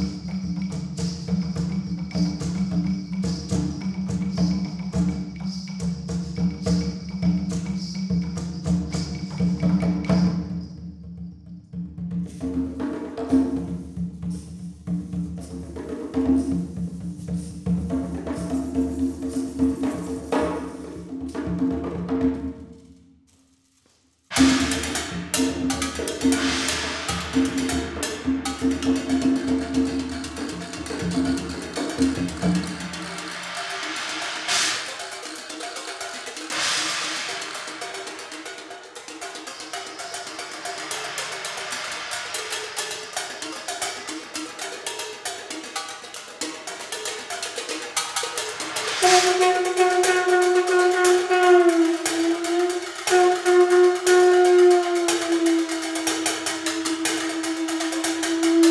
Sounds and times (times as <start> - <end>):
Timpani: 0.0 - 58.7.